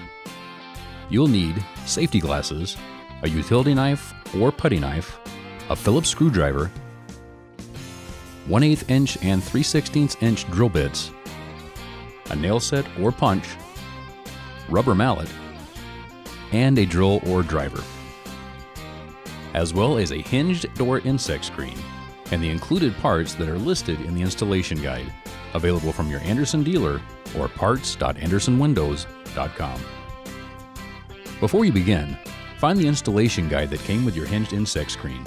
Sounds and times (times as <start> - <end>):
Music: 0.0 - 35.2
Speech: 1.1 - 6.8, 8.5 - 11.1, 12.3 - 13.6, 14.7 - 15.3, 16.5 - 17.9, 19.6 - 29.9, 31.4 - 35.2.